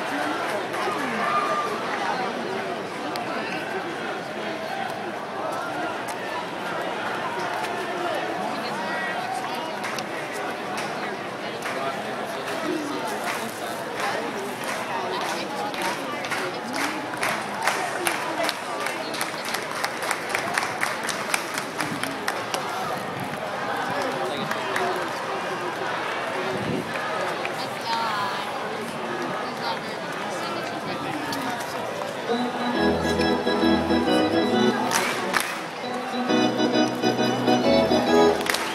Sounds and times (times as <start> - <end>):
Speech: 0.0 - 33.5.